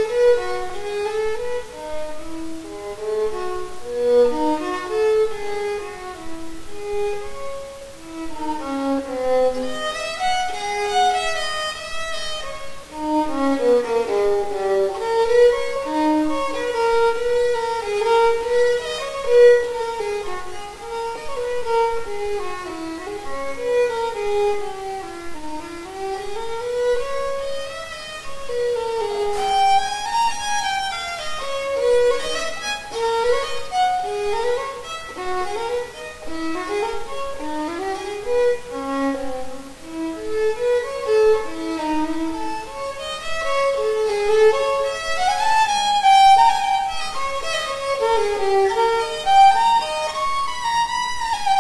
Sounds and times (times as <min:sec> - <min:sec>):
Violin, fiddle: 0:00.0 - 0:51.6.